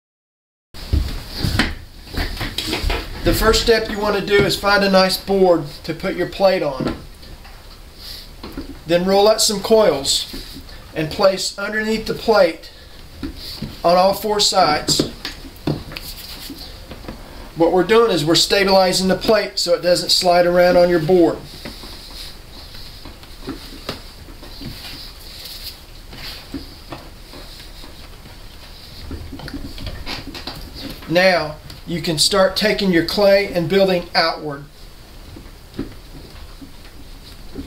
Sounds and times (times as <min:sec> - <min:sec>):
Speech: 0:03.2 - 0:07.0, 0:08.9 - 0:10.4, 0:11.0 - 0:12.7, 0:13.8 - 0:15.2, 0:17.6 - 0:21.5, 0:31.1 - 0:34.7.